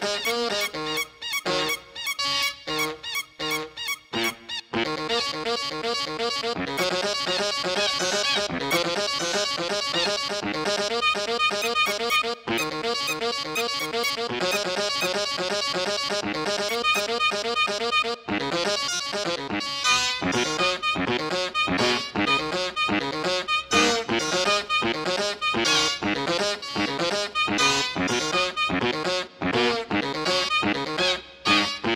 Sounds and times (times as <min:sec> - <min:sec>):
Music: 0:00.0 - 0:31.9.